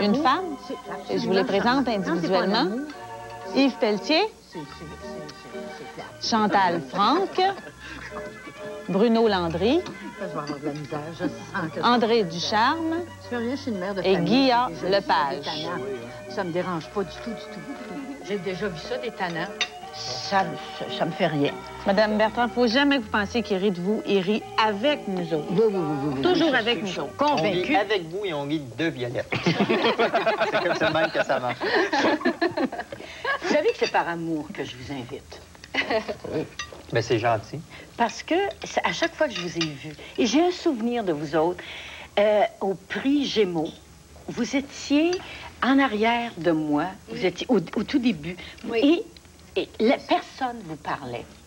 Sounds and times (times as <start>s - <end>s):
Music: 0.0s - 51.4s.